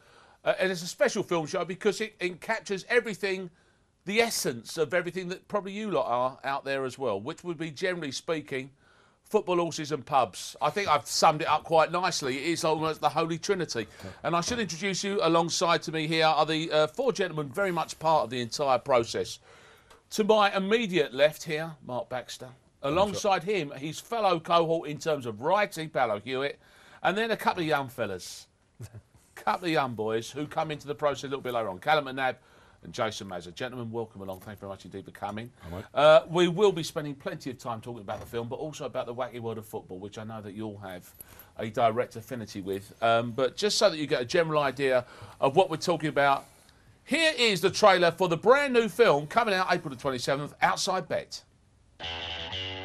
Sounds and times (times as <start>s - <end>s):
Speech: 0.5s - 19.4s, 20.1s - 46.5s, 47.1s - 51.5s.